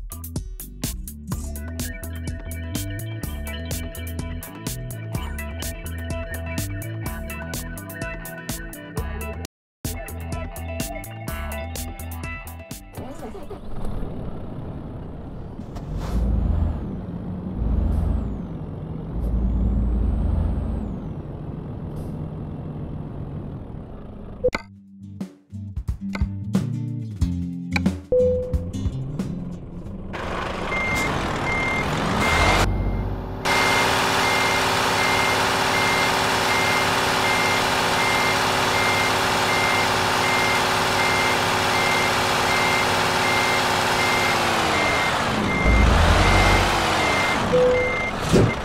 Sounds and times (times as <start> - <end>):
Music: 0.0 - 13.5, 24.6 - 30.2
Truck: 0.0 - 24.7, 28.1 - 48.6.